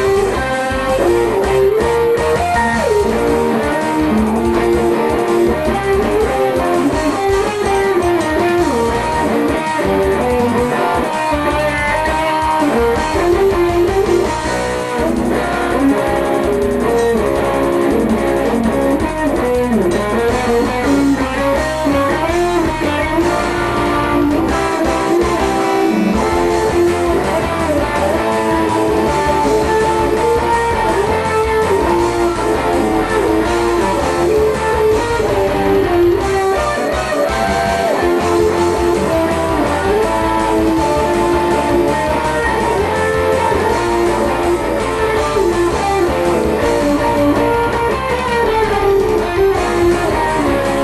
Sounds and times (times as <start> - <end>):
Electric guitar: 0.0 - 50.8
Strum: 0.0 - 50.8.